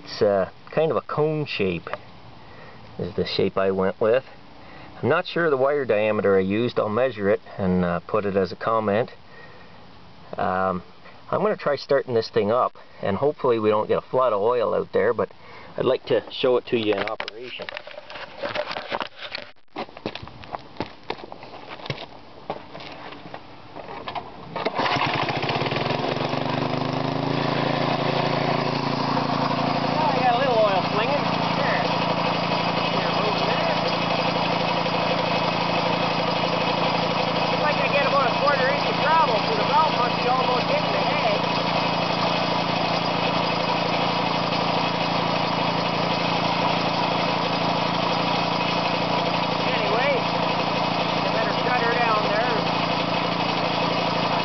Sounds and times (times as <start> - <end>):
Speech: 0.0 - 2.0, 3.0 - 4.3, 5.0 - 9.2, 10.4 - 17.7, 30.0 - 31.9, 32.9 - 33.9, 37.6 - 41.5, 49.6 - 50.3, 51.2 - 52.7
Engine: 0.0 - 11.8, 16.8 - 54.4.